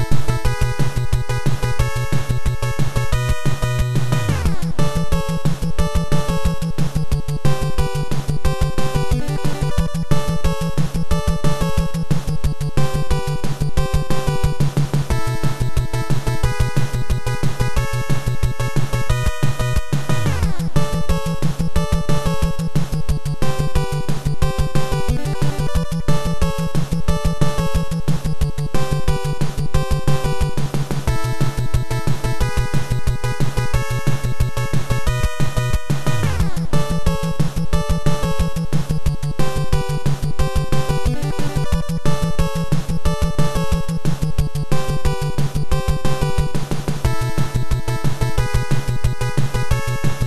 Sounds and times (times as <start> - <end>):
Video game music: 0.0 - 50.2.